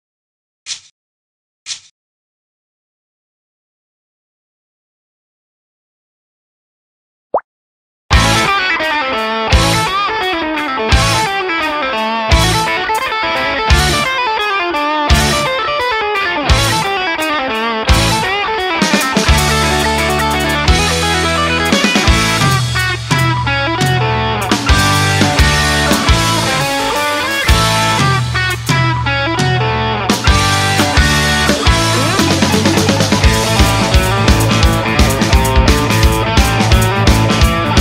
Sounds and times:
Theme music: 17.9 - 37.8.

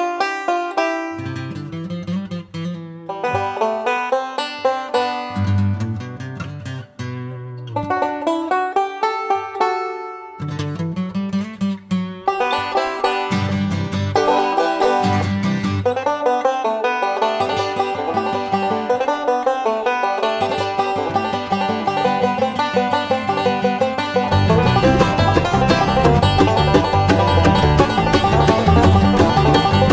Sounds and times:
Banjo: 0.0 - 29.9.

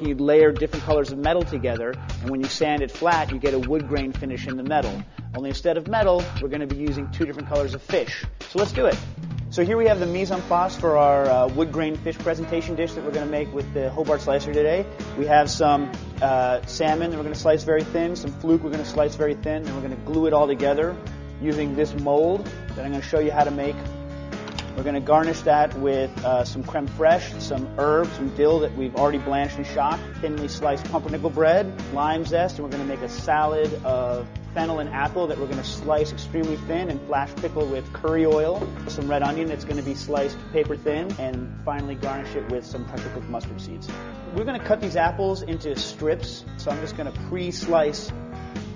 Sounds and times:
Speech: 0.0 - 9.0, 9.6 - 23.8, 24.8 - 48.2
Music: 0.0 - 48.7.

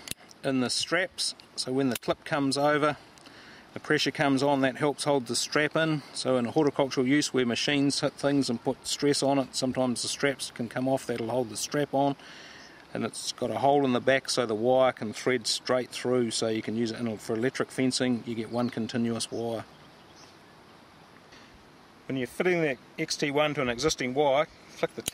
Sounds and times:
Speech: 0.4 - 3.0, 3.8 - 12.2, 12.9 - 19.7, 22.1 - 25.1.

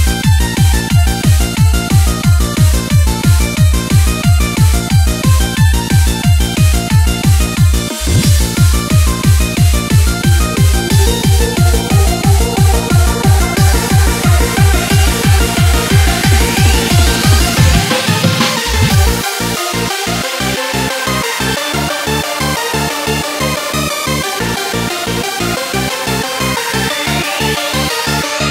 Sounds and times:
Techno: 0.0 - 28.5.

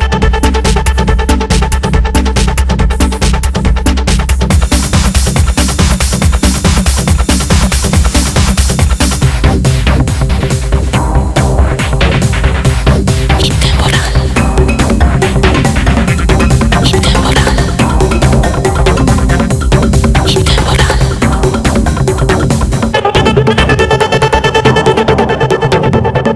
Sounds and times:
Music: 0.0 - 26.3
Sound effect: 4.7 - 26.3.

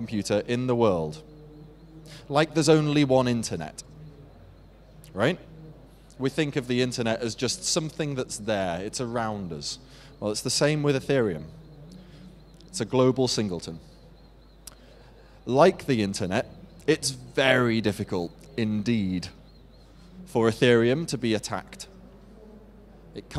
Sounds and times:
Speech: 0.0 - 13.8, 15.5 - 19.4, 20.1 - 23.3.

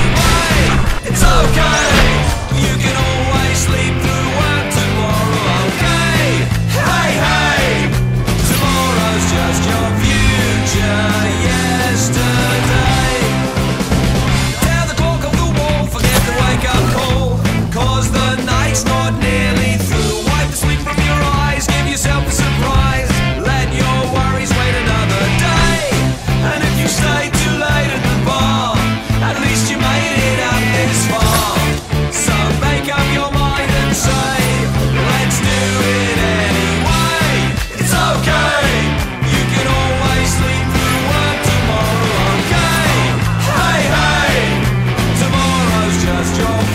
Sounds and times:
Grunge: 0.0 - 46.7.

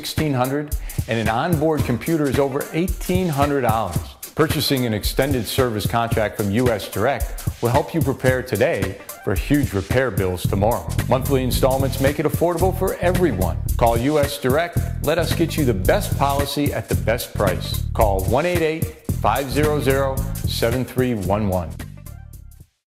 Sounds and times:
Speech: 0.0 - 21.8
Music: 0.0 - 22.9.

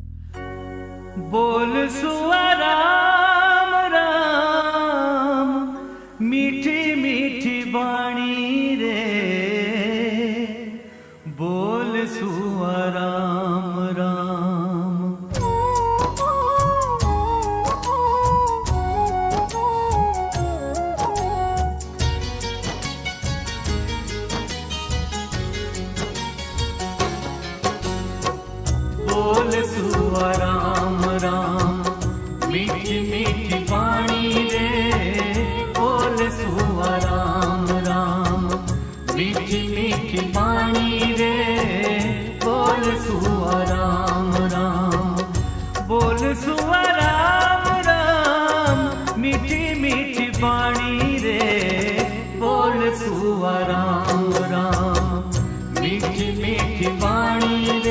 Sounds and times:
Music of Bollywood: 0.0 - 57.9
Mantra: 1.3 - 15.5, 29.0 - 57.9
Folk music: 15.4 - 57.9.

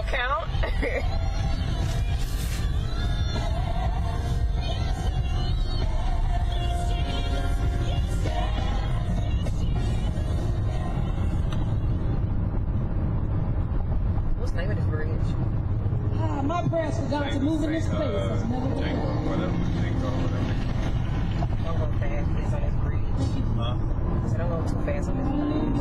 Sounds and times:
Car: 0.0 - 25.8
Outside, urban or manmade: 0.0 - 25.8.

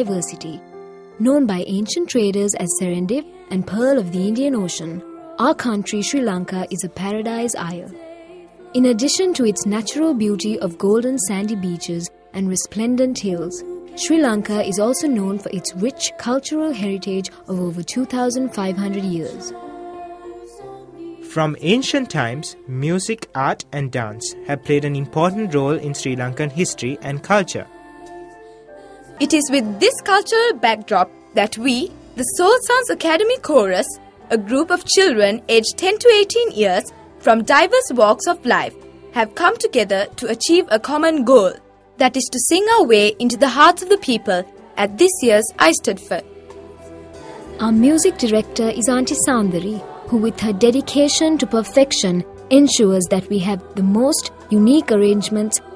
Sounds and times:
Speech: 0.0 - 0.6, 1.2 - 7.9, 8.8 - 19.5, 21.3 - 27.7, 29.2 - 46.2, 47.6 - 55.6
Music: 0.0 - 55.7.

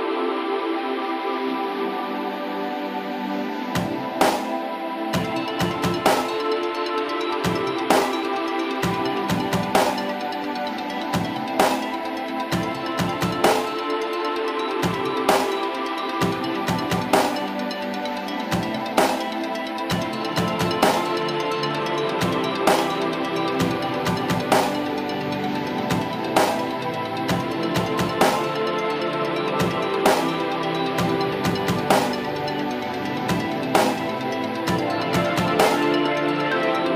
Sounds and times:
Music: 0.0 - 36.9.

